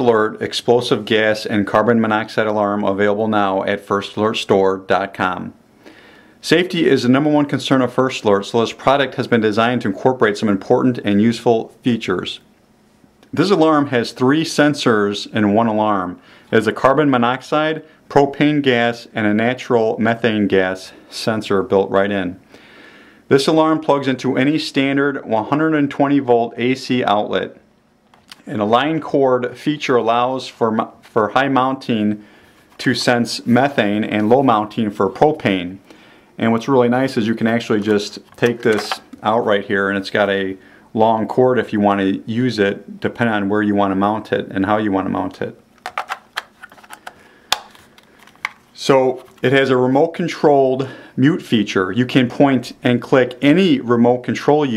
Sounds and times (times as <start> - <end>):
Speech: 0.0 - 5.6, 6.4 - 12.5, 13.3 - 22.4, 23.3 - 27.6, 28.3 - 32.2, 32.8 - 35.8, 36.4 - 45.6, 48.8 - 54.7.